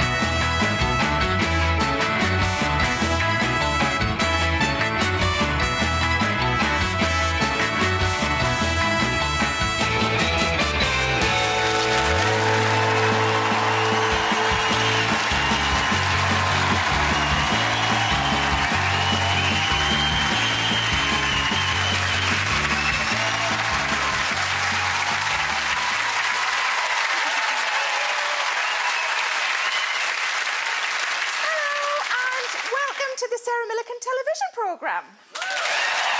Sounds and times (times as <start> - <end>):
Music: 0.0 - 27.1
Speech: 31.5 - 35.2.